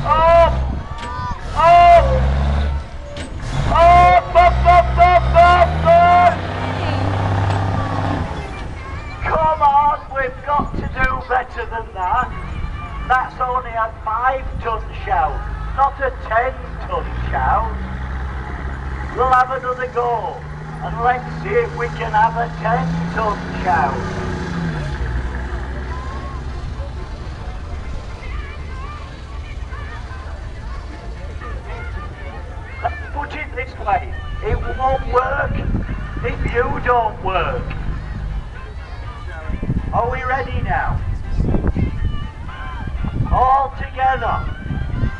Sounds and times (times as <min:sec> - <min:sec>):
Vehicle: 0:00.0 - 0:45.1.